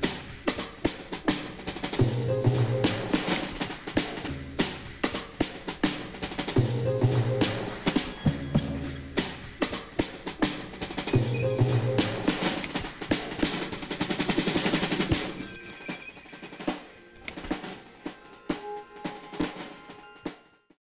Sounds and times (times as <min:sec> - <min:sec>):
Music: 0:00.0 - 0:20.8.